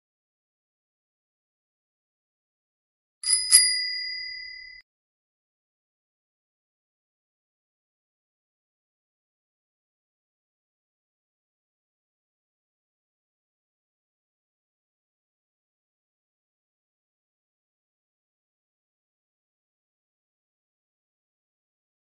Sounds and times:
Bicycle bell: 0:03.2 - 0:04.8.

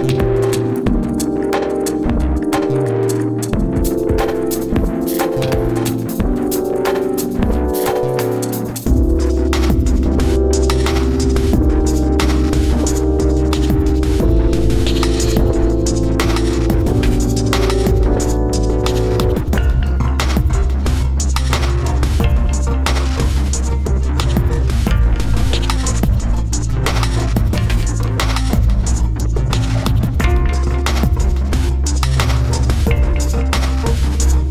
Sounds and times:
Music: 0:00.0 - 0:34.5.

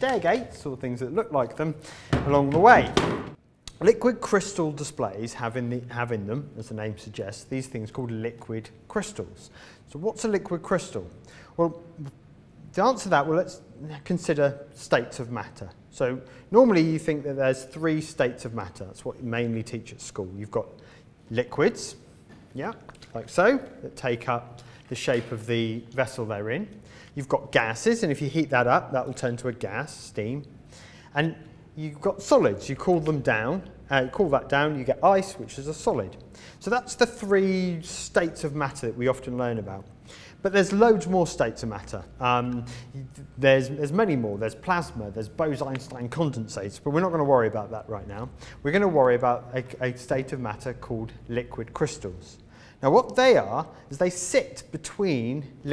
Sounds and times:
Speech: 0:00.0 - 0:03.1, 0:03.7 - 0:30.5, 0:31.1 - 0:55.7.

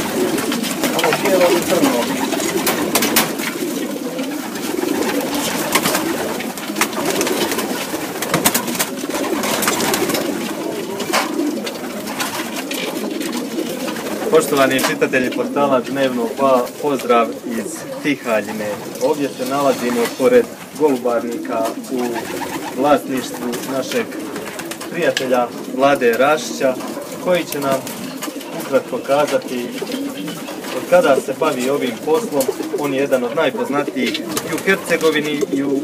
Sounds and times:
Pigeon, dove: 0:00.0 - 0:35.8.

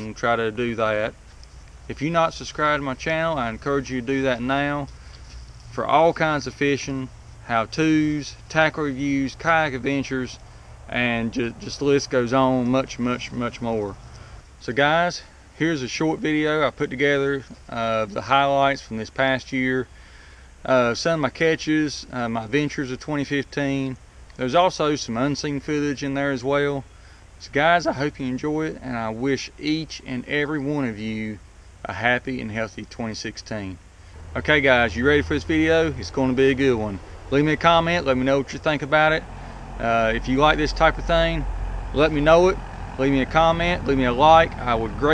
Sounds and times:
Speech: 0:00.0 - 0:01.2, 0:01.9 - 0:04.9, 0:05.7 - 0:14.0, 0:14.6 - 0:19.9, 0:20.6 - 0:26.8, 0:27.4 - 0:33.8, 0:34.4 - 0:39.2, 0:39.8 - 0:45.1
Outside, rural or natural: 0:00.0 - 0:45.1.

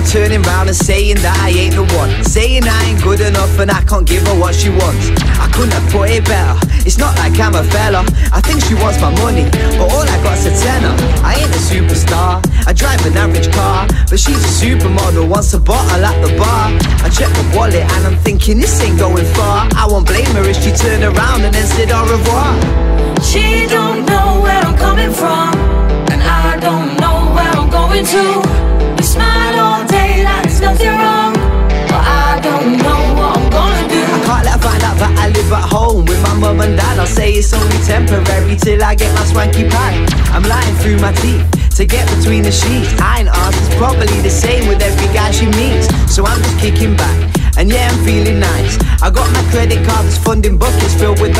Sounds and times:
Music: 0:00.0 - 0:51.3.

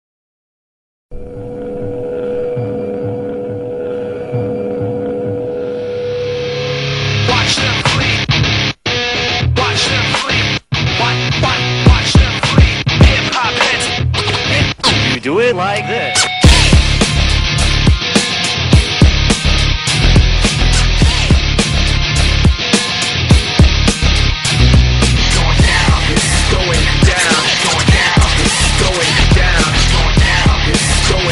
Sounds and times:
Music: 0:01.2 - 0:31.3.

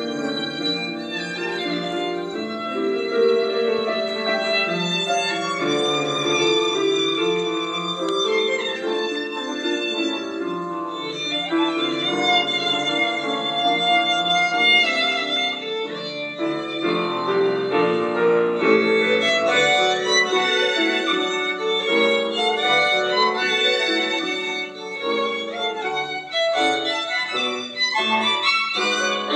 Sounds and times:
Violin, fiddle: 0:00.0 - 0:29.3.

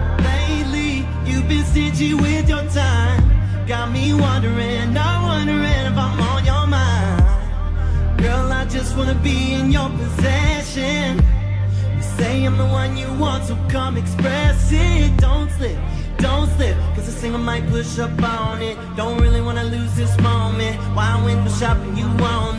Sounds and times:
Pop music: 0:00.0 - 0:22.5.

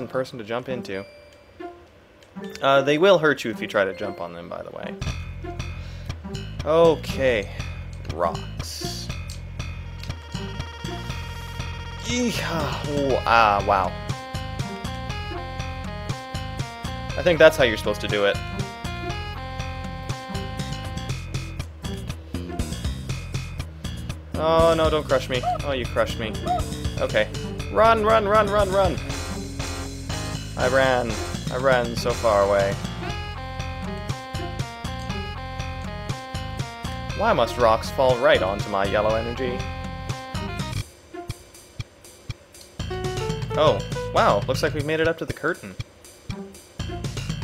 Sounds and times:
Speech: 0:00.0 - 0:01.1, 0:02.6 - 0:05.0, 0:06.6 - 0:09.1, 0:12.1 - 0:14.0, 0:17.2 - 0:18.4, 0:24.4 - 0:29.0, 0:30.6 - 0:32.8, 0:37.2 - 0:39.6, 0:43.5 - 0:45.8
Music: 0:00.0 - 0:47.4.

